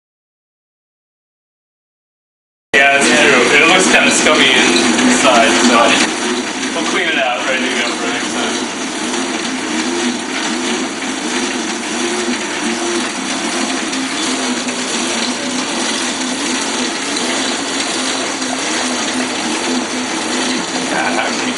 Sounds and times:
Bicycle: 3.0 - 21.5.

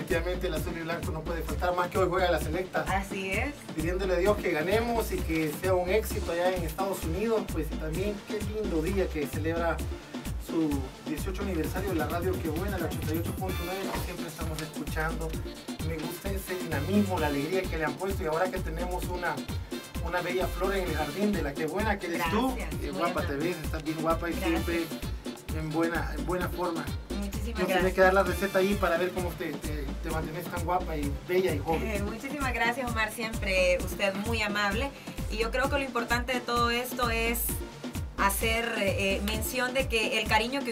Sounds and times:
Music: 0.0 - 40.7
Speech: 10.4 - 19.4, 20.0 - 24.9, 25.5 - 37.6, 38.2 - 40.7.

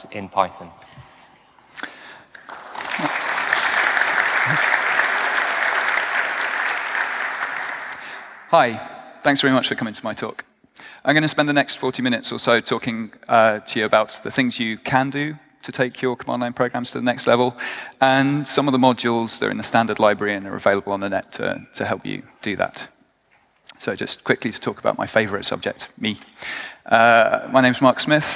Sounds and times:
Speech: 0.0 - 0.8, 8.5 - 10.5, 11.1 - 23.0, 23.7 - 26.2, 26.9 - 28.3.

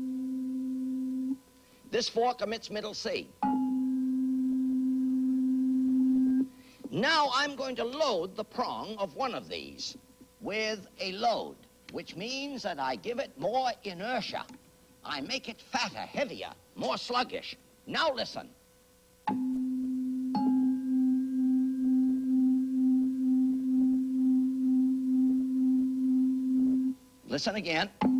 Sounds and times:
Speech: 1.9 - 3.3, 6.9 - 18.6, 27.3 - 28.0.

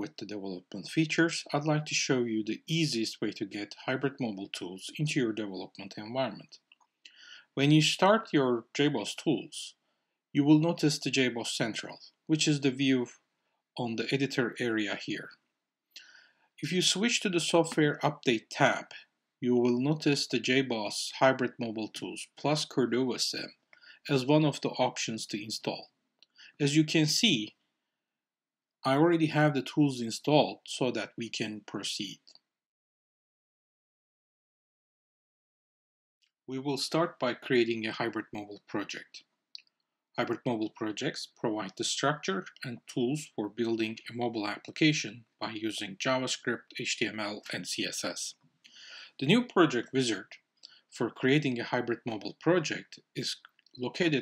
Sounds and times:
Speech: 0.0 - 6.6, 7.2 - 9.8, 10.4 - 13.2, 13.8 - 15.4, 16.0 - 25.9, 26.5 - 27.5, 28.9 - 32.3, 36.5 - 39.2, 40.2 - 48.3, 48.9 - 50.4, 51.0 - 54.2.

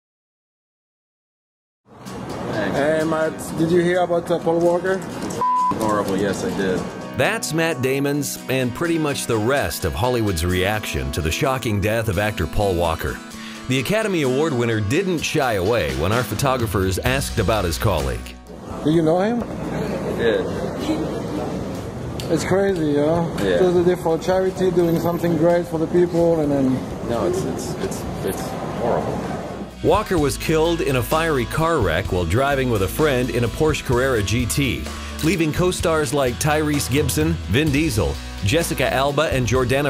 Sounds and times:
Music: 1.9 - 18.6, 29.7 - 39.8
Speech: 5.8 - 19.4, 29.8 - 39.8.

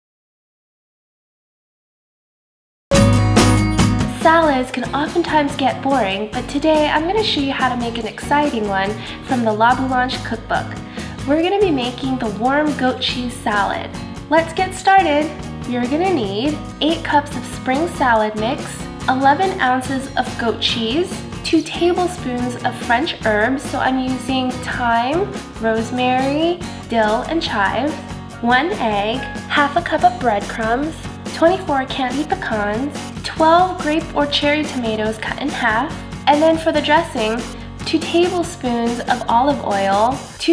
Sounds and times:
Music: 2.9 - 40.5
Speech: 4.2 - 40.5.

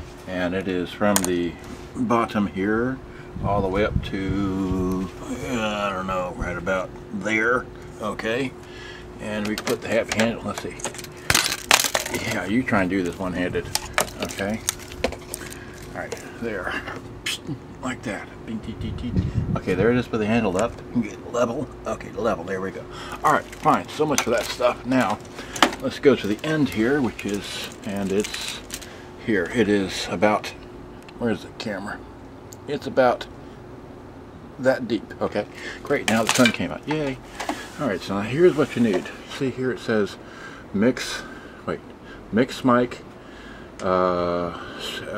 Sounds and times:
Speech: 0.3 - 8.6, 9.2 - 10.9, 12.1 - 14.7, 15.9 - 25.2, 25.8 - 30.6, 31.2 - 32.0, 32.6 - 33.3, 34.6 - 37.2, 37.8 - 43.0, 43.8 - 45.1.

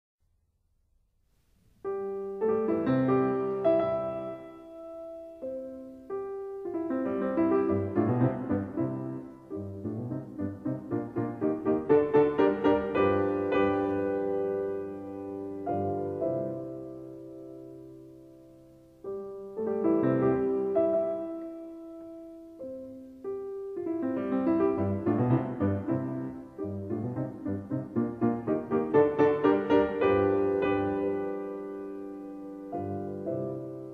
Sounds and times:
Piano: 1.2 - 33.9.

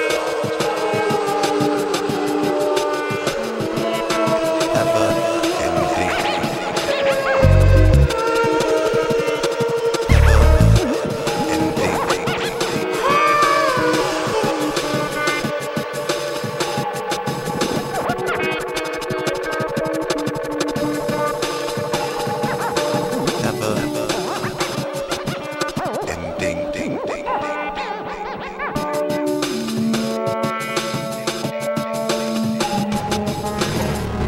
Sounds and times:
Music: 0.0 - 34.2
Speech: 4.7 - 7.5, 11.4 - 13.3, 23.4 - 24.3, 26.1 - 27.6.

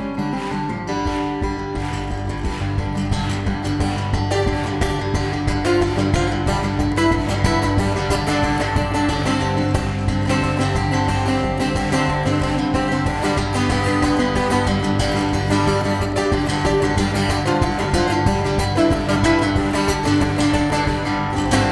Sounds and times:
Music: 0.0 - 21.7.

